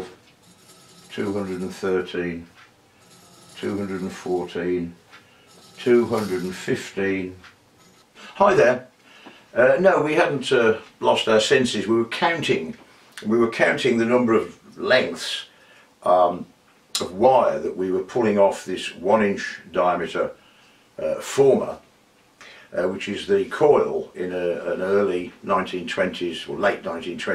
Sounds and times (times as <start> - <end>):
Speech: 1.1 - 2.5, 3.6 - 5.0, 5.8 - 7.5, 8.3 - 8.9, 9.5 - 20.4, 21.0 - 21.8, 22.7 - 27.3.